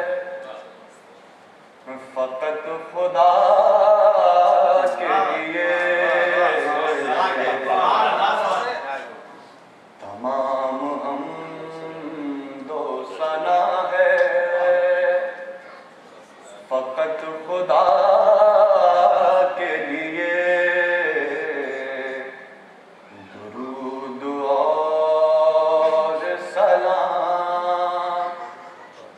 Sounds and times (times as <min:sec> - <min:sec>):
Singing: 0:00.0 - 0:00.7, 0:01.8 - 0:08.7, 0:10.0 - 0:15.9, 0:16.6 - 0:29.1.